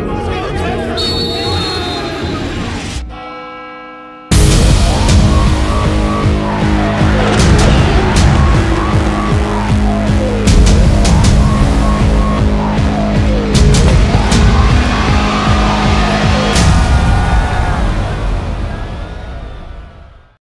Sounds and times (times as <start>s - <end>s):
Music: 0.0s - 20.4s.